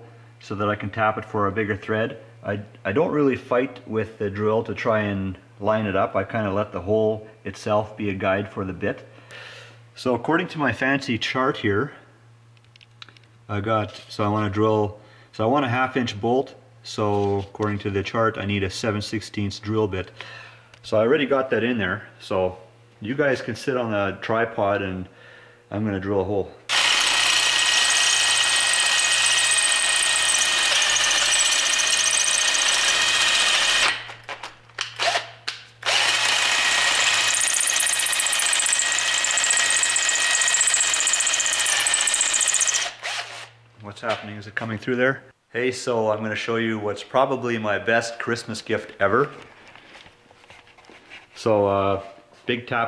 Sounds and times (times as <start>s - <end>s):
Drill: 26.7s - 34.1s, 35.0s - 43.6s.